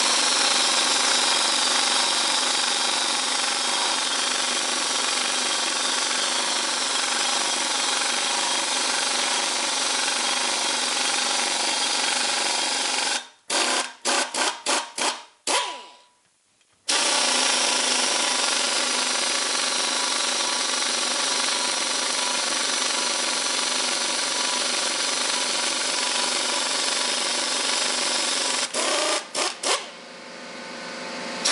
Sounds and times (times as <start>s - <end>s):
Drill: 0.0s - 16.1s, 16.9s - 31.5s.